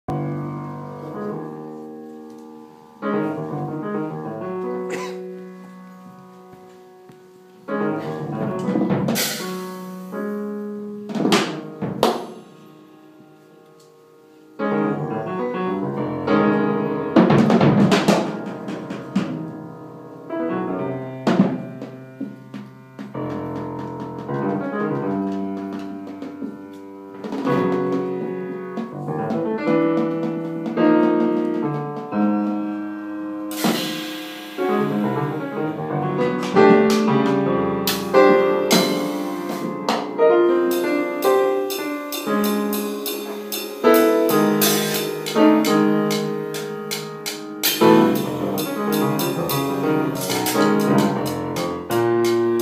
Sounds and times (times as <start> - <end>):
Jazz: 0.1 - 52.6.